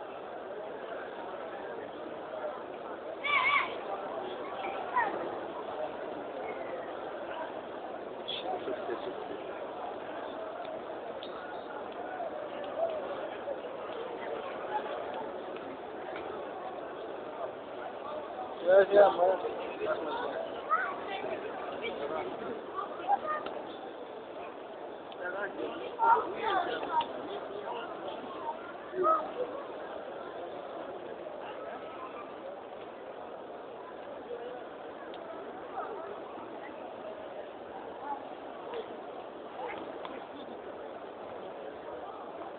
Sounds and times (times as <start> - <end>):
Speech: 0.0 - 42.5.